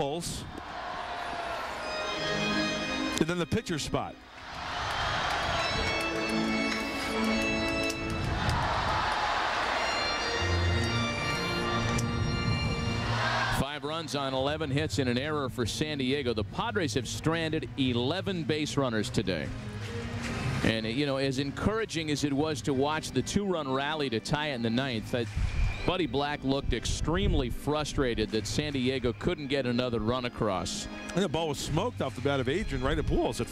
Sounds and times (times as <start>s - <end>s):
Music: 1.0s - 33.5s
Speech: 3.2s - 4.2s, 13.6s - 19.5s, 20.7s - 25.3s, 25.9s - 33.5s.